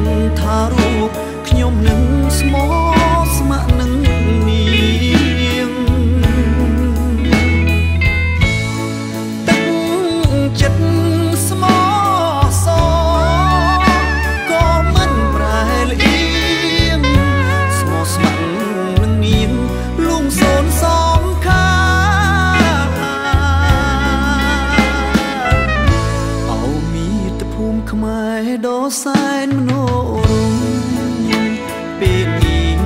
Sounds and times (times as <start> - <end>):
Music: 0.0 - 32.8
Singing: 9.5 - 25.7.